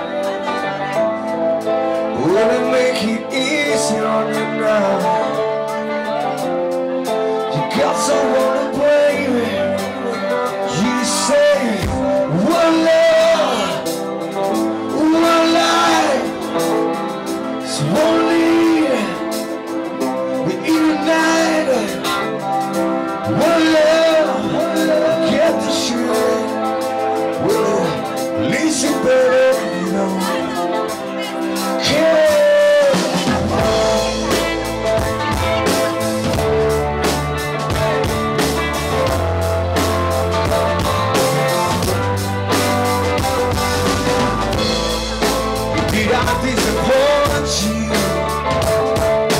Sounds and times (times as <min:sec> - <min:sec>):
Music: 0:00.0 - 0:49.3.